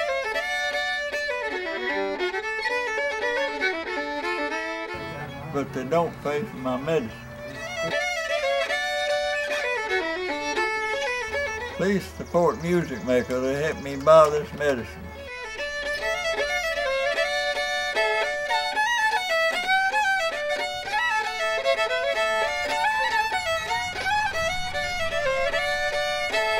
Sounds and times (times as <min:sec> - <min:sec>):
Music: 0:00.0 - 0:26.6
Speech: 0:05.0 - 0:08.0, 0:11.8 - 0:15.0.